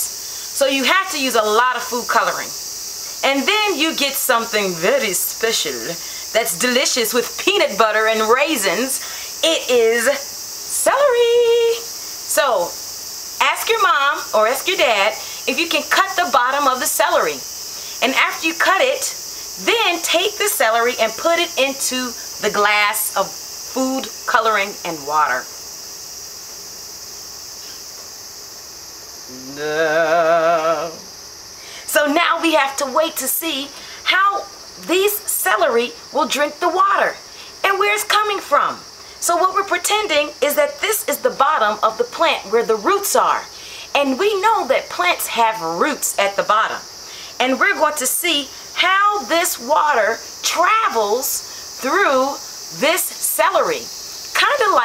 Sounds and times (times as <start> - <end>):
Speech: 0.0 - 2.6, 3.2 - 10.2, 10.8 - 12.7, 13.4 - 17.4, 18.0 - 25.5, 29.3 - 31.0, 31.9 - 46.8, 47.4 - 54.8.